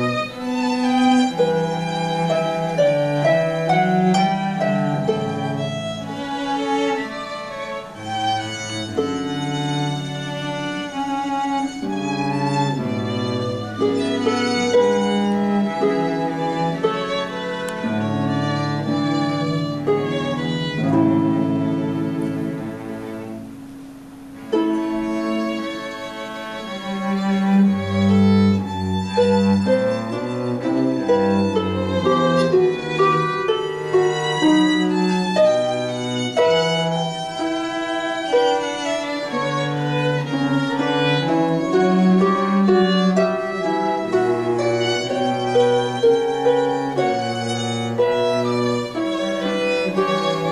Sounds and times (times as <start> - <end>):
Cello: 0.0 - 50.5
Pizzicato: 0.0 - 50.5.